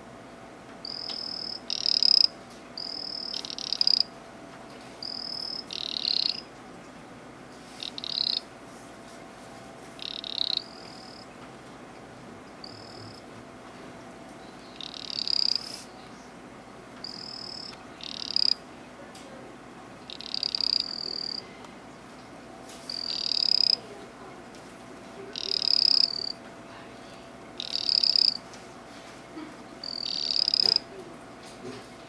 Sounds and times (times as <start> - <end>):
Frog: 0.8 - 4.1, 5.0 - 6.5, 7.8 - 8.5, 10.0 - 11.3, 12.6 - 13.3, 14.7 - 15.8, 17.0 - 18.6, 20.0 - 21.4, 22.9 - 23.8, 25.3 - 26.4, 27.6 - 28.4, 29.8 - 30.8.